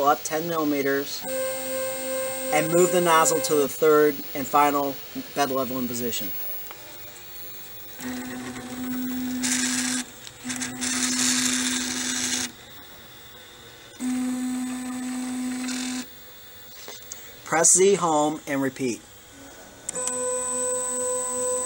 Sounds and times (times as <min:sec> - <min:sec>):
Printer: 0:00.0 - 0:16.1, 0:19.9 - 0:21.6.